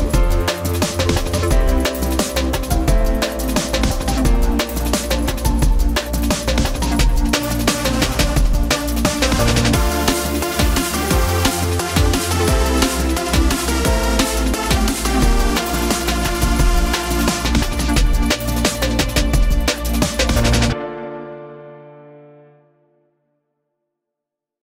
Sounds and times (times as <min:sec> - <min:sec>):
Music: 0:00.0 - 0:24.0.